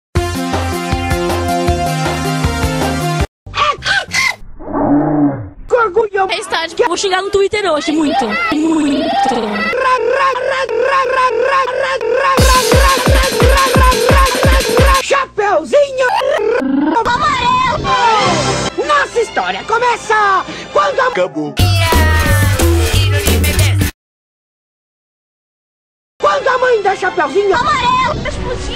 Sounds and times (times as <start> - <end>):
Music: 0.2 - 4.2, 12.4 - 15.0, 17.7 - 23.9, 26.2 - 28.7.